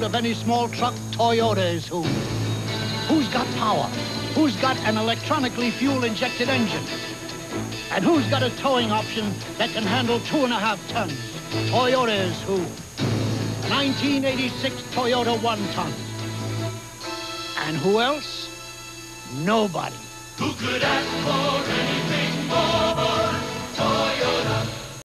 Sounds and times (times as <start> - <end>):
Speech: 0.0 - 2.1, 3.1 - 6.9, 7.9 - 12.8, 13.7 - 16.0, 17.6 - 18.5, 19.3 - 20.1
Music: 0.0 - 25.0.